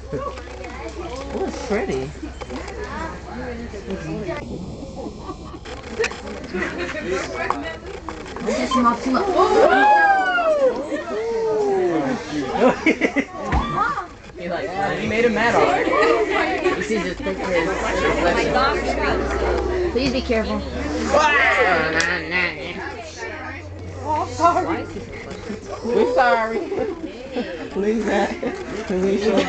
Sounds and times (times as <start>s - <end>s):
Outside, urban or manmade: 0.0s - 29.4s.